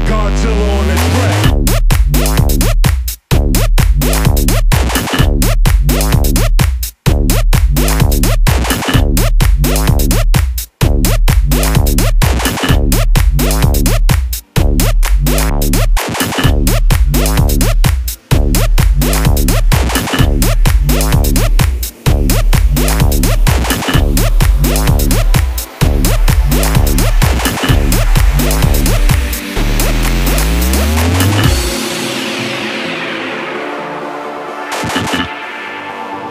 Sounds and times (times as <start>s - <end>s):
Music: 0.0s - 36.3s.